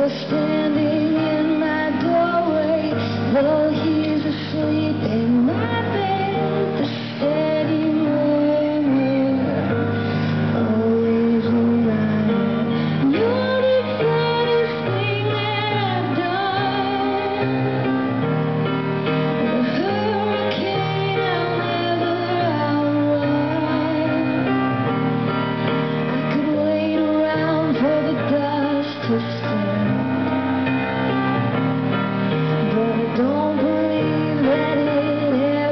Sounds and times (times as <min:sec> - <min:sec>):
Music: 0:00.0 - 0:35.7.